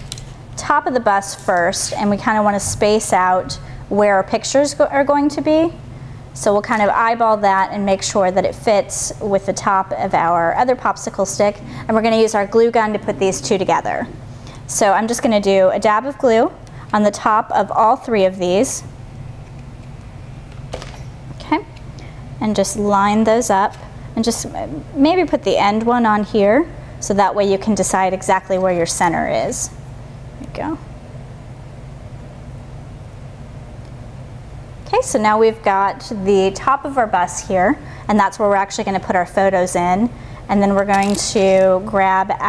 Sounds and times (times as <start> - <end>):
Speech: 0.6 - 5.8, 6.4 - 14.1, 14.7 - 18.9, 21.4 - 21.7, 22.4 - 29.8, 30.4 - 30.8, 34.9 - 42.4.